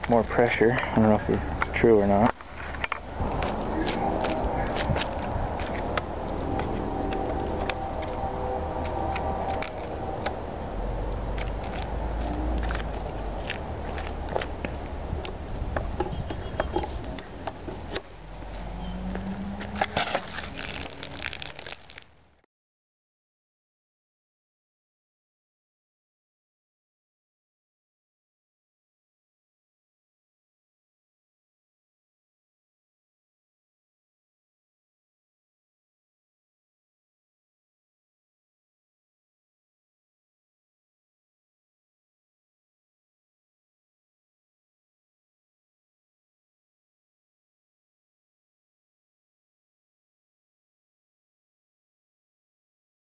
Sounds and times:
Speech: 0:00.0 - 0:02.4
Outside, urban or manmade: 0:00.0 - 0:22.5
Walk, footsteps: 0:01.6 - 0:08.2, 0:11.3 - 0:18.0.

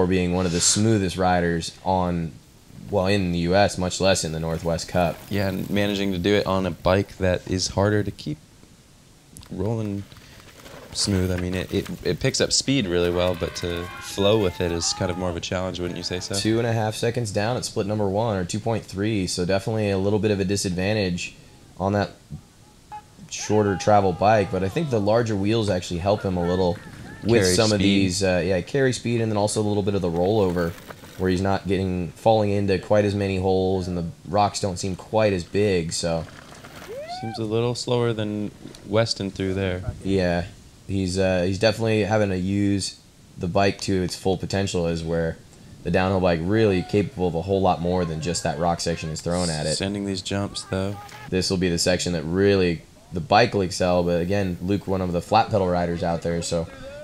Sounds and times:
Speech: 0:00.0 - 0:08.4, 0:09.4 - 0:10.1, 0:11.0 - 0:22.2, 0:23.2 - 0:36.3, 0:37.1 - 0:57.0.

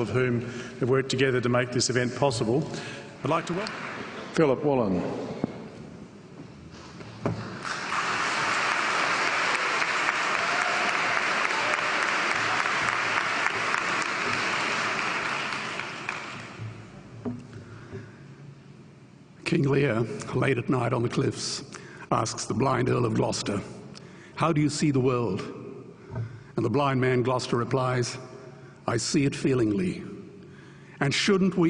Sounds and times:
Male speech, man speaking: 0:00.0 - 0:03.7, 0:04.3 - 0:05.2, 0:19.4 - 0:23.8, 0:24.4 - 0:25.6, 0:26.6 - 0:28.2, 0:28.9 - 0:30.2, 0:31.0 - 0:31.6
Narration, monologue: 0:00.0 - 0:06.4, 0:16.6 - 0:31.6.

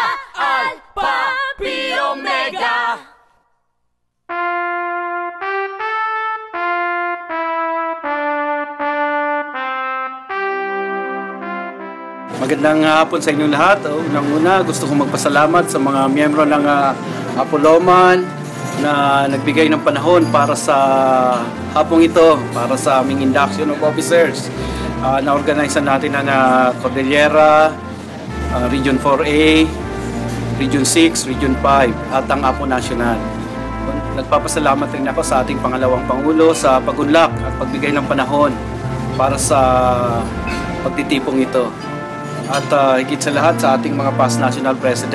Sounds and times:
Brass instrument: 0:04.3 - 0:45.1.

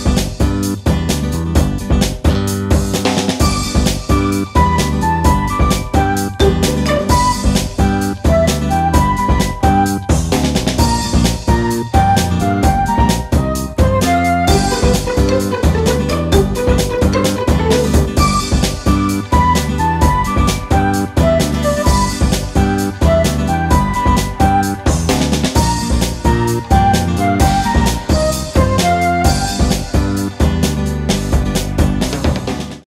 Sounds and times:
Music: 0:00.0 - 0:32.9.

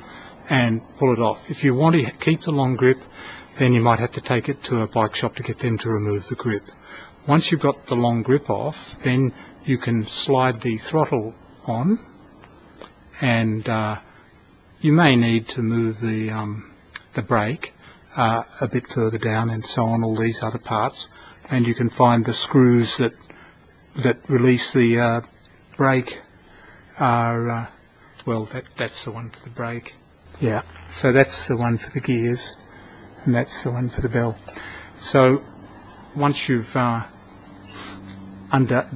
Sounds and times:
Speech: 0:00.0 - 0:12.2, 0:13.1 - 0:14.1, 0:14.8 - 0:23.2, 0:24.0 - 0:26.3, 0:26.9 - 0:32.6, 0:33.2 - 0:38.9.

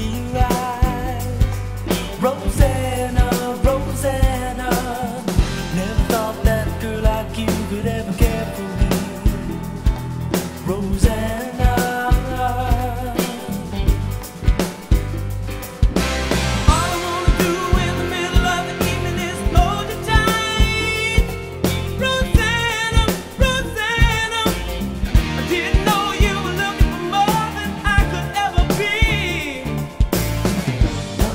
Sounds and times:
Bass drum: 0:00.0 - 0:31.3
Drum kit: 0:00.0 - 0:31.3.

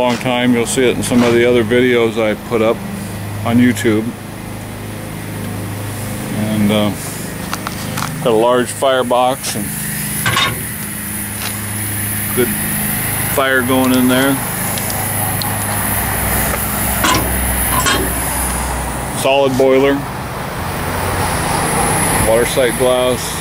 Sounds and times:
Speech: 0:00.0 - 0:02.8, 0:03.4 - 0:04.2, 0:06.3 - 0:07.1, 0:08.2 - 0:09.8, 0:12.3 - 0:12.6, 0:13.3 - 0:14.4, 0:19.2 - 0:20.1, 0:22.2 - 0:23.4.

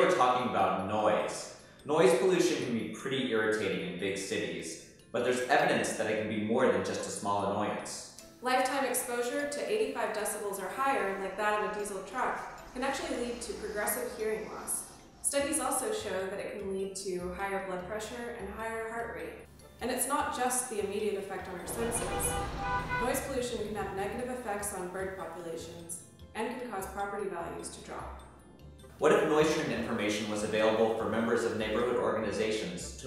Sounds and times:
Speech: 0:00.0 - 0:28.1, 0:29.0 - 0:33.0
Music: 0:00.0 - 0:33.0.

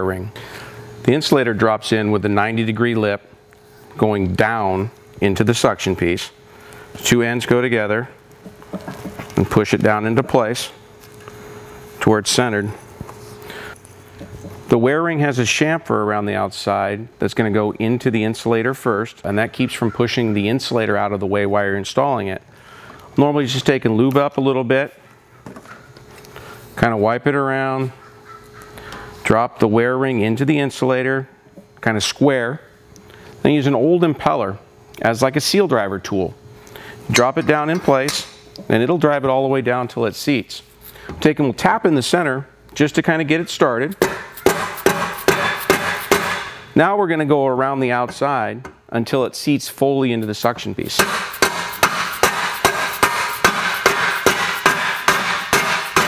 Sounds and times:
Speech: 0:00.0 - 0:00.3, 0:01.1 - 0:03.3, 0:04.0 - 0:06.4, 0:07.0 - 0:08.2, 0:09.4 - 0:10.8, 0:12.0 - 0:12.8, 0:14.7 - 0:22.4, 0:23.2 - 0:25.0, 0:26.8 - 0:28.0, 0:29.2 - 0:32.7, 0:33.4 - 0:36.4, 0:37.1 - 0:44.0, 0:46.8 - 0:51.0.

